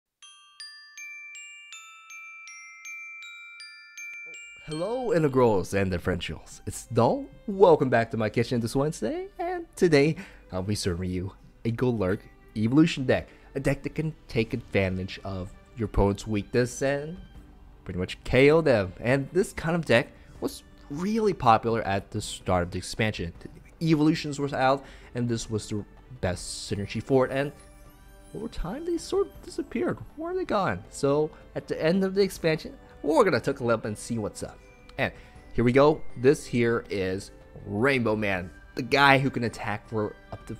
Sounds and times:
Glockenspiel: 0:00.2 - 0:07.8, 0:23.4 - 0:40.5
Speech: 0:04.7 - 0:17.2, 0:17.9 - 0:27.6, 0:28.4 - 0:40.5.

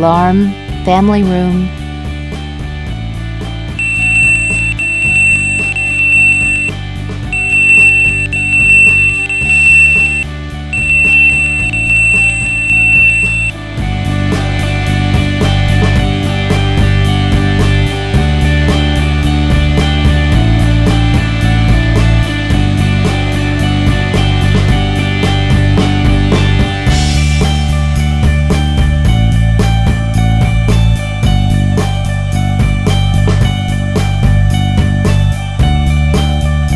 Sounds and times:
Music: 0:00.0 - 0:36.7.

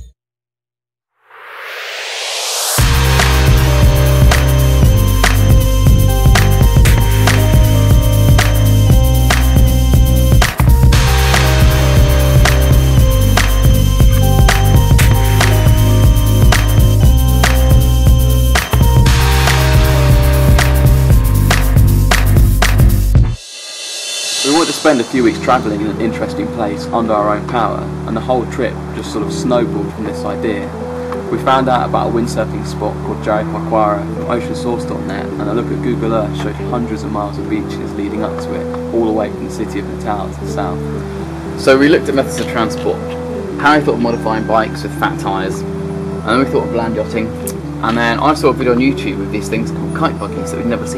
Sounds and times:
Music: 0:02.1 - 0:50.9
Speech: 0:24.4 - 0:30.7, 0:31.3 - 0:40.8, 0:41.6 - 0:45.6, 0:46.2 - 0:50.9.

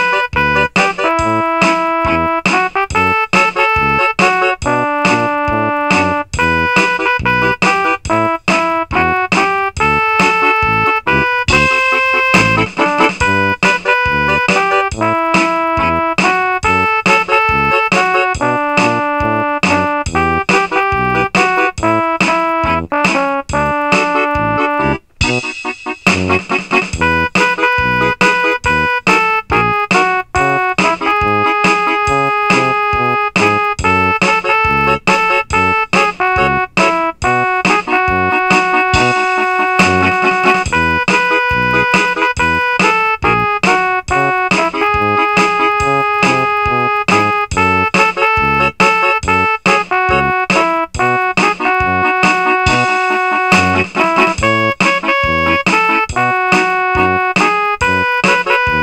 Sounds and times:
Christian music: 0:00.0 - 0:58.8.

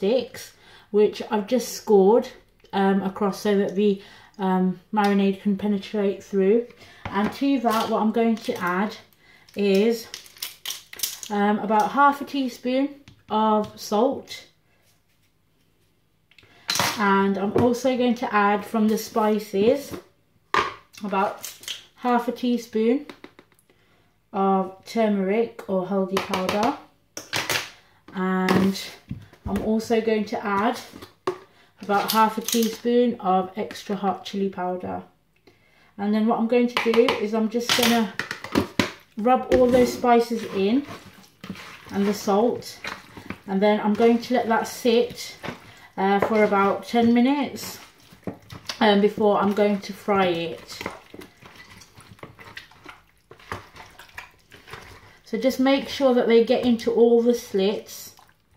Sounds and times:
Speech: 0:00.0 - 0:10.2, 0:11.2 - 0:14.5, 0:16.9 - 0:20.0, 0:21.0 - 0:21.4, 0:22.0 - 0:23.1, 0:24.3 - 0:26.9, 0:28.1 - 0:31.0, 0:31.8 - 0:35.1, 0:36.0 - 0:38.2, 0:39.2 - 0:41.0, 0:41.9 - 0:42.9, 0:43.5 - 0:47.9, 0:48.7 - 0:51.0, 0:55.3 - 0:58.2.

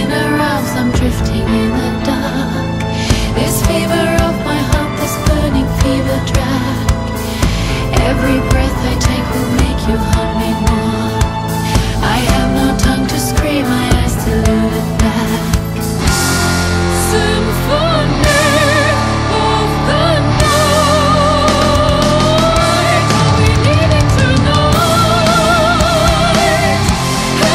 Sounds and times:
Heavy metal: 0:00.0 - 0:27.5.

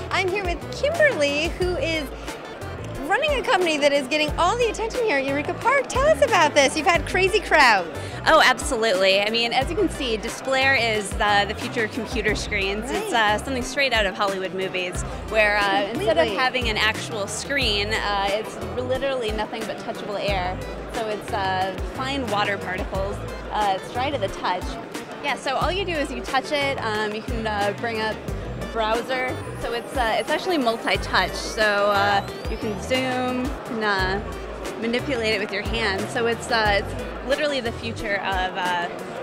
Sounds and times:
Music: 0:00.0 - 0:39.2
Speech: 0:08.3 - 0:24.7.

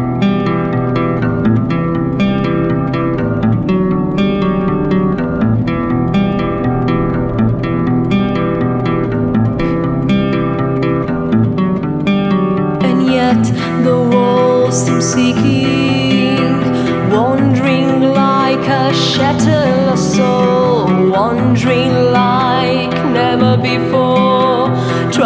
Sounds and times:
Theme music: 0:01.7 - 0:12.8.

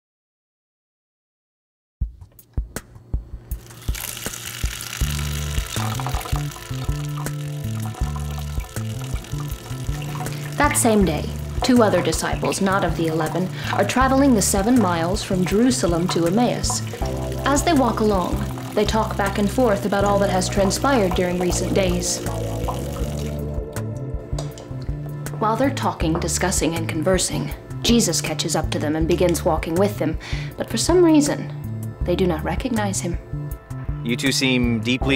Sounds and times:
Music: 0:02.0 - 0:35.1.

